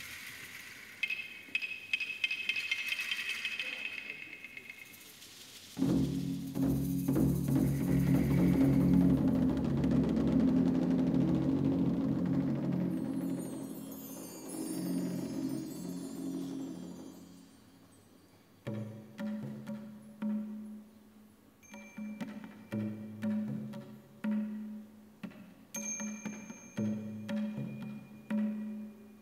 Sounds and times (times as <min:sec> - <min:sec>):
Percussion: 0:00.0 - 0:29.2.